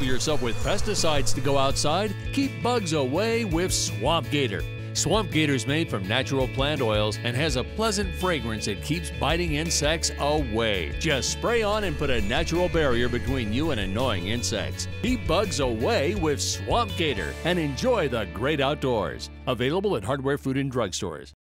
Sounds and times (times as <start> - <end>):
Music: 0.0 - 21.4
Speech: 0.0 - 21.4.